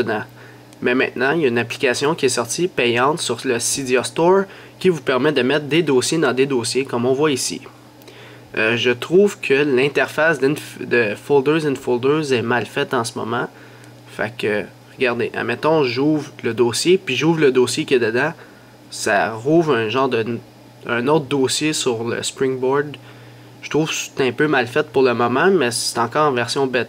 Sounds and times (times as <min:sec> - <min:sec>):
Speech: 0:00.0 - 0:07.8, 0:08.5 - 0:23.0, 0:23.6 - 0:26.8.